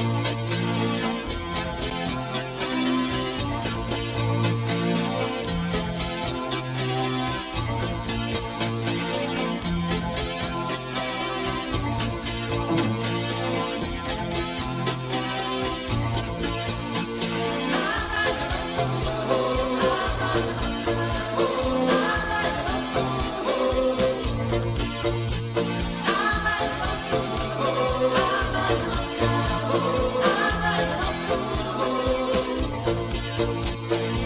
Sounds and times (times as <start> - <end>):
Music: 0.0 - 34.2.